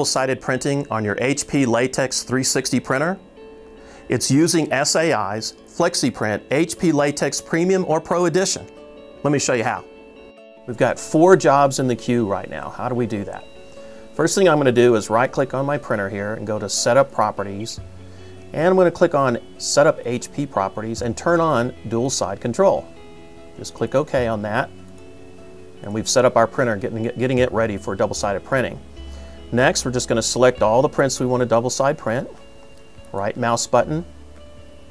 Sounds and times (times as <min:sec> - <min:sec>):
Speech: 0:00.0 - 0:03.2, 0:04.1 - 0:09.9, 0:10.7 - 0:13.5, 0:14.2 - 0:17.8, 0:18.5 - 0:22.8, 0:23.6 - 0:24.7, 0:25.8 - 0:28.8, 0:29.5 - 0:32.4, 0:33.1 - 0:34.1
Music: 0:00.0 - 0:34.9.